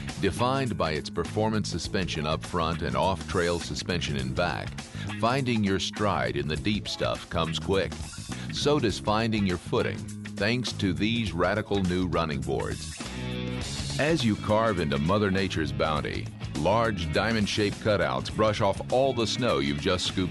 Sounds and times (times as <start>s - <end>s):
Music: 0.0s - 20.3s
Speech: 0.2s - 12.8s, 14.0s - 20.3s.